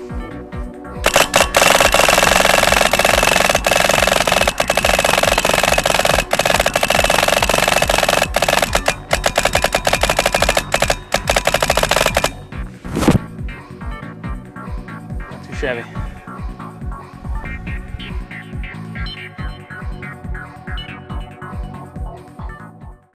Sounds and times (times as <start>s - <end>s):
Music: 0.0s - 9.2s, 9.8s - 23.1s
Speech: 15.3s - 16.1s.